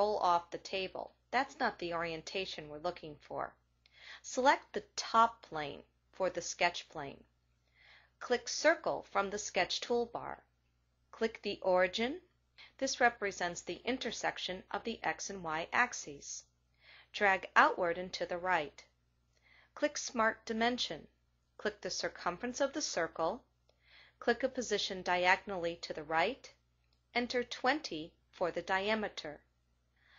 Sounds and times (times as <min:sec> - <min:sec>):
Speech: 0:00.0 - 0:03.6, 0:04.2 - 0:07.3, 0:08.2 - 0:10.4, 0:11.2 - 0:16.5, 0:17.2 - 0:18.9, 0:19.8 - 0:23.4, 0:24.2 - 0:26.6, 0:27.2 - 0:29.4.